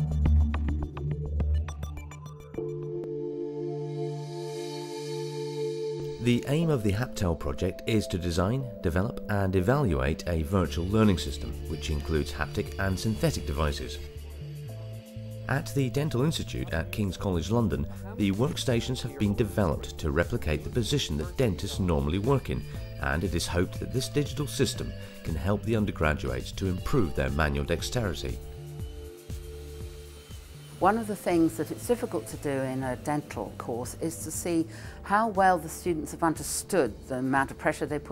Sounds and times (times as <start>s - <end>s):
Music: 0.0s - 38.1s
Speech: 6.2s - 14.0s, 15.5s - 28.4s, 30.8s - 38.1s.